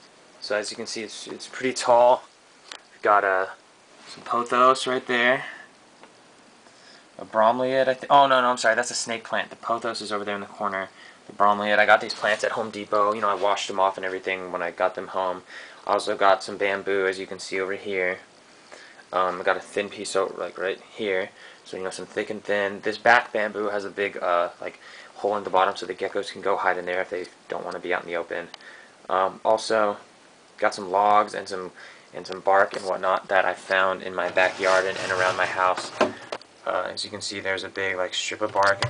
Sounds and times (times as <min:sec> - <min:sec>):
Speech: 0:00.4 - 0:02.3, 0:03.0 - 0:05.7, 0:07.2 - 0:18.3, 0:19.1 - 0:38.8.